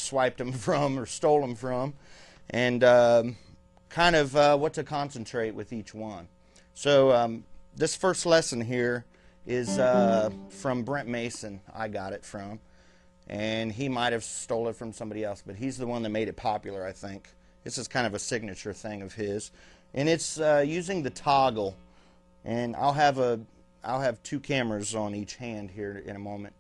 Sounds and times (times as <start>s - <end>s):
Speech: 0.0s - 12.6s, 13.3s - 21.8s, 22.5s - 26.6s
Guitar: 9.6s - 11.4s.